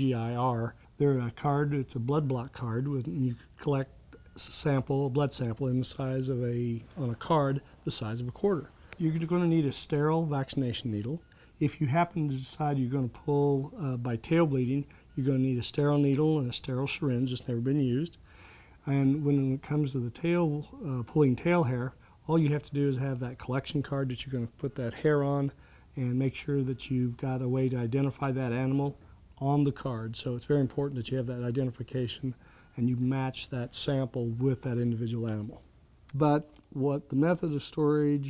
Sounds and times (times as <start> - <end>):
Speech: 0.0 - 18.2, 18.8 - 38.2.